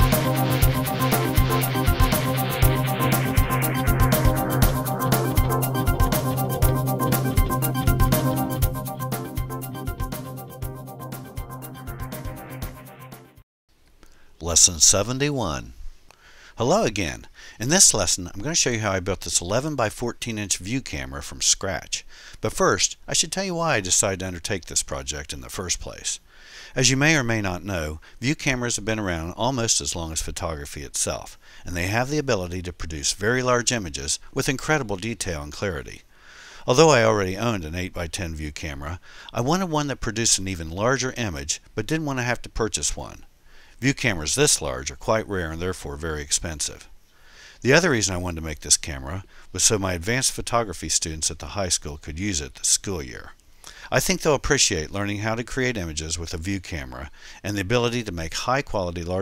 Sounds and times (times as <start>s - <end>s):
Speech: 14.4s - 15.8s, 16.6s - 26.2s, 26.8s - 36.0s, 36.7s - 46.9s, 47.6s - 59.2s.